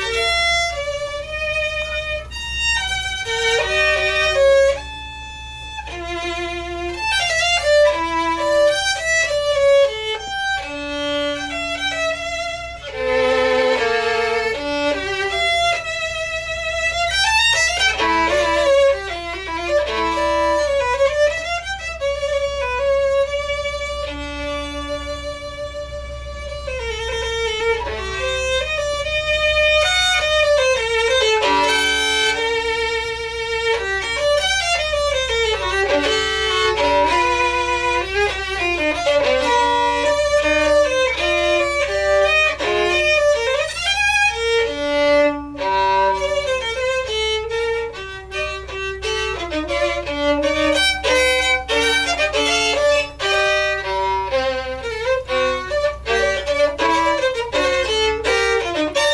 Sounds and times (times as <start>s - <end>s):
Violin, fiddle: 0.0s - 59.1s.